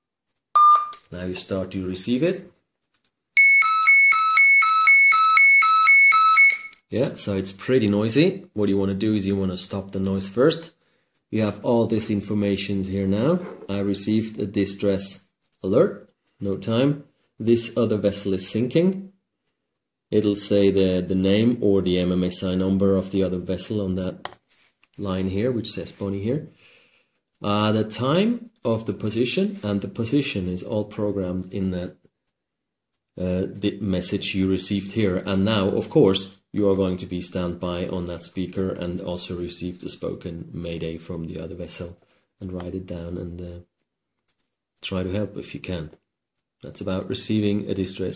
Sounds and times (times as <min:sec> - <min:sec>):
Alarm: 0:00.6 - 0:01.0, 0:03.4 - 0:06.8
Speech: 0:01.1 - 0:02.6, 0:06.9 - 0:19.1, 0:20.1 - 0:24.3, 0:25.0 - 0:26.5, 0:27.4 - 0:32.0, 0:33.2 - 0:43.7, 0:44.8 - 0:46.0, 0:46.6 - 0:48.1.